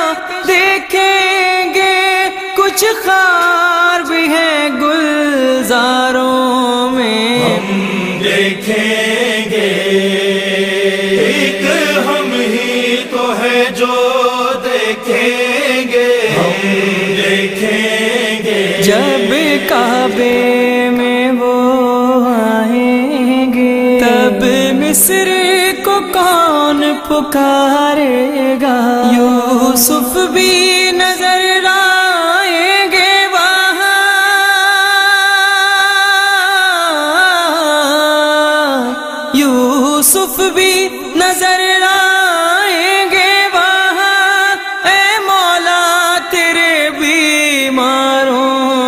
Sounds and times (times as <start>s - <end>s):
Mantra: 0.0s - 48.8s.